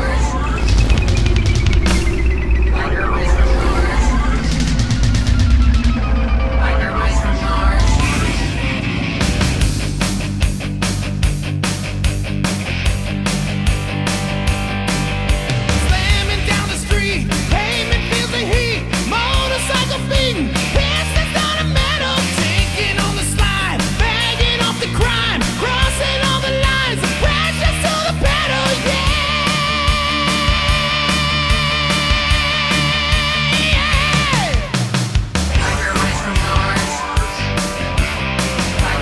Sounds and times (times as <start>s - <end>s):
Music: 0.0s - 39.0s.